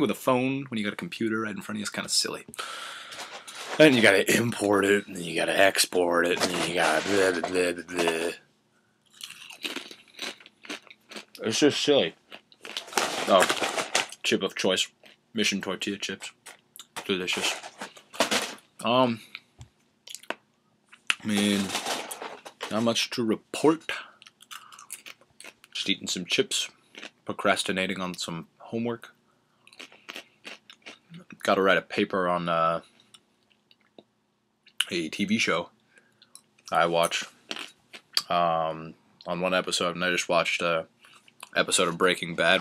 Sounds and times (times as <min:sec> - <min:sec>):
Speech: 0:00.0 - 0:02.5, 0:03.7 - 0:08.4, 0:11.4 - 0:12.2, 0:13.2 - 0:13.6, 0:14.2 - 0:16.4, 0:17.0 - 0:17.6, 0:18.8 - 0:19.2, 0:21.1 - 0:21.9, 0:22.6 - 0:24.2, 0:25.8 - 0:26.7, 0:27.3 - 0:29.1, 0:31.2 - 0:32.8, 0:34.8 - 0:35.7, 0:36.7 - 0:37.3, 0:38.2 - 0:42.6.